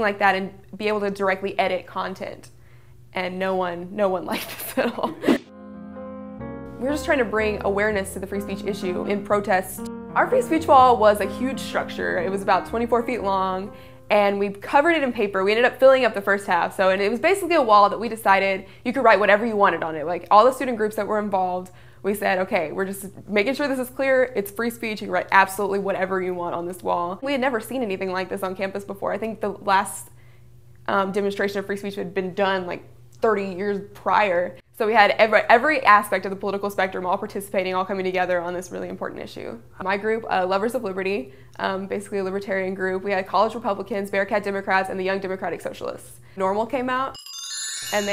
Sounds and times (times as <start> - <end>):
Female speech, woman speaking: 0.0 - 2.5, 3.2 - 5.2, 6.8 - 30.1, 30.9 - 47.2
Narration, monologue: 0.0 - 5.5, 6.4 - 48.1
Music: 5.4 - 15.0, 47.2 - 48.1.